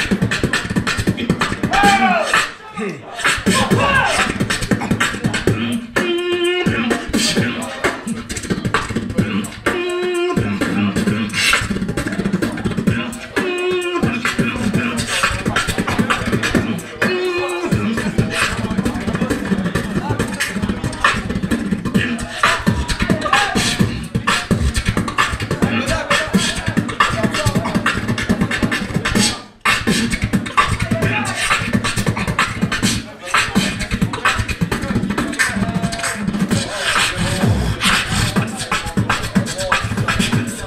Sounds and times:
Beatboxing: 0:00.0 - 0:40.6.

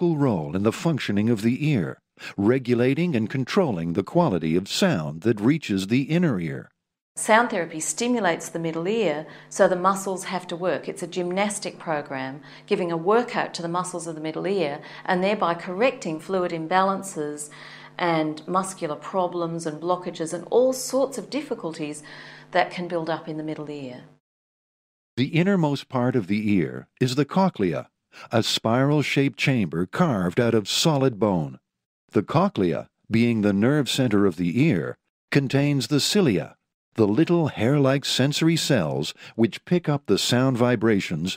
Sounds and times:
Speech: 0:00.0 - 0:24.0, 0:25.2 - 0:41.3.

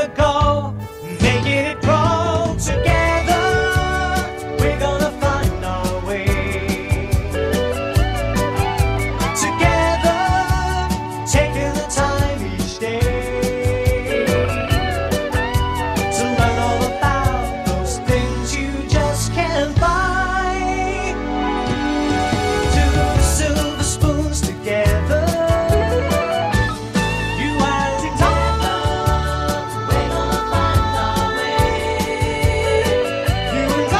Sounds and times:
Music: 0:00.0 - 0:33.9.

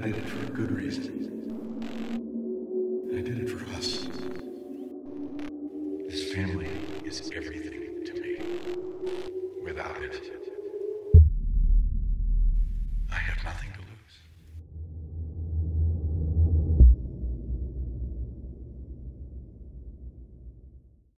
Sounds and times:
Speech: 0:00.0 - 0:01.3, 0:03.1 - 0:04.3, 0:06.1 - 0:08.4, 0:09.6 - 0:10.6, 0:13.1 - 0:14.3.

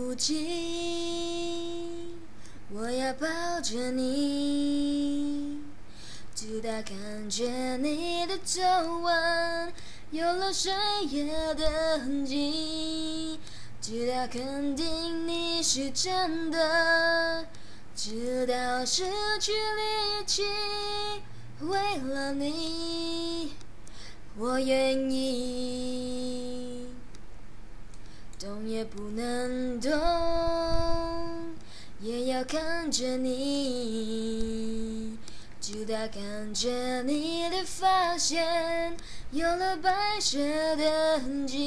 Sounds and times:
Female singing: 0:00.0 - 0:05.8, 0:06.4 - 0:23.6, 0:24.4 - 0:27.1, 0:28.4 - 0:41.6.

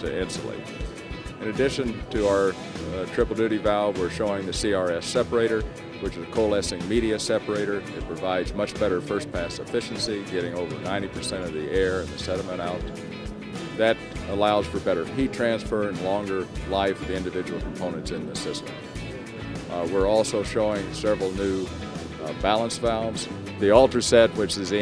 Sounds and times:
Speech: 0:00.0 - 0:00.7, 0:01.4 - 0:12.9, 0:13.8 - 0:18.7, 0:19.7 - 0:24.8
Music: 0:00.0 - 0:24.8.

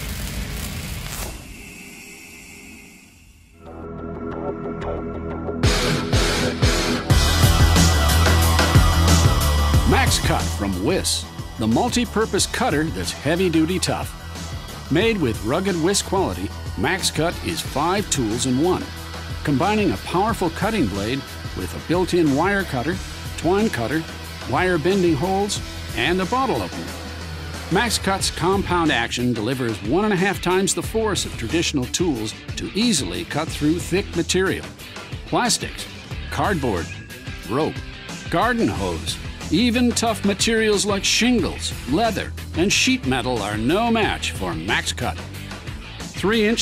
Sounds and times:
Music: 0:00.0 - 0:46.6
Speech: 0:09.9 - 0:14.1, 0:14.9 - 0:26.9, 0:27.7 - 0:45.3, 0:46.2 - 0:46.6.

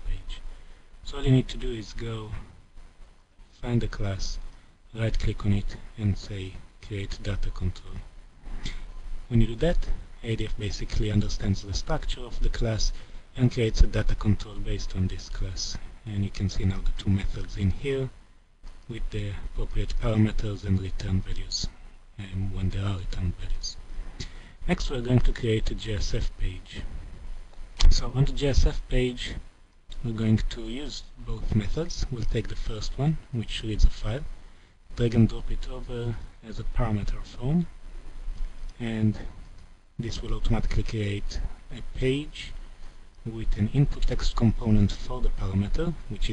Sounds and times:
Speech: 0:00.0 - 0:02.6, 0:03.5 - 0:08.1, 0:08.7 - 0:18.2, 0:18.9 - 0:23.8, 0:24.6 - 0:27.0, 0:27.8 - 0:37.8, 0:38.8 - 0:39.4, 0:40.0 - 0:42.6, 0:43.2 - 0:46.3.

